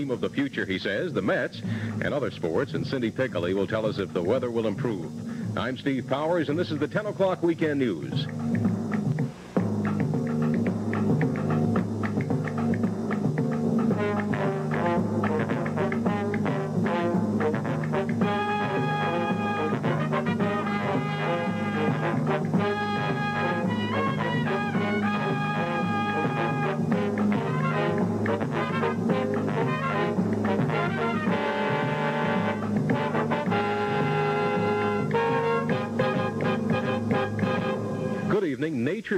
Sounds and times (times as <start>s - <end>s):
Music: 0.0s - 39.1s.